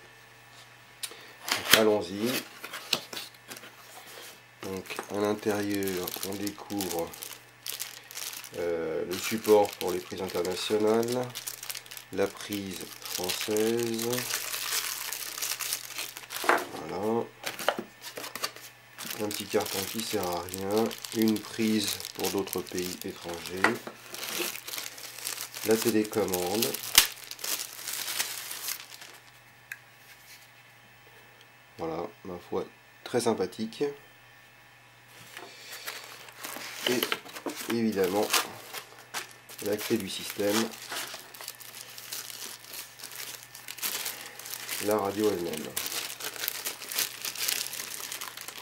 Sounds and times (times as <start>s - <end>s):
Speech: 1.7s - 2.4s, 4.6s - 7.2s, 8.5s - 11.4s, 12.1s - 14.3s, 16.7s - 17.4s, 19.1s - 23.8s, 25.6s - 26.8s, 31.8s - 34.0s, 36.9s - 38.5s, 39.6s - 40.8s, 44.8s - 45.8s.